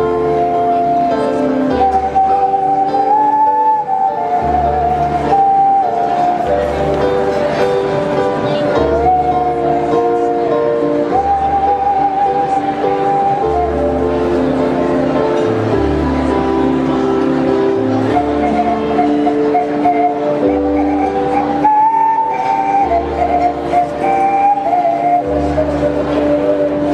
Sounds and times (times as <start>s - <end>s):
Whistling: 0.0s - 7.4s, 8.6s - 15.2s, 17.8s - 26.9s
Music: 0.0s - 26.9s.